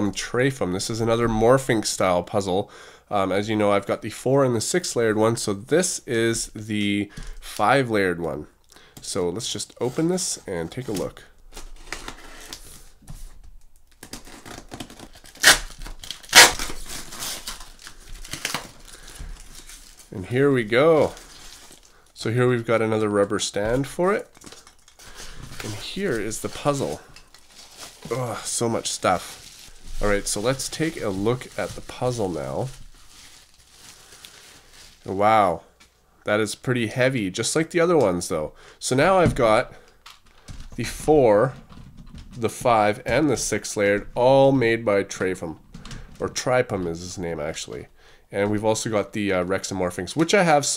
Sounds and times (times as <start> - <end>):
Speech: 0.0 - 11.3, 20.1 - 21.2, 22.2 - 24.3, 25.6 - 27.1, 28.1 - 29.4, 30.0 - 32.8, 35.1 - 35.7, 36.3 - 39.8, 40.8 - 41.6, 42.4 - 45.6, 46.2 - 50.7
Crumpling, crinkling: 9.0 - 13.2, 13.8 - 36.0.